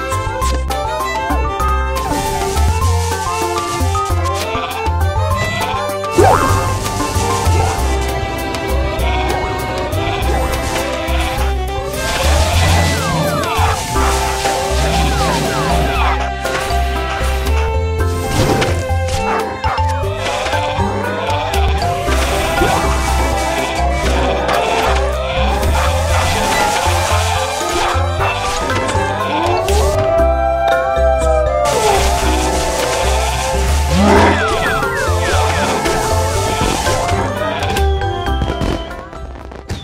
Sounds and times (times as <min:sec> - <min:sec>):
Music: 0:00.0 - 0:39.8.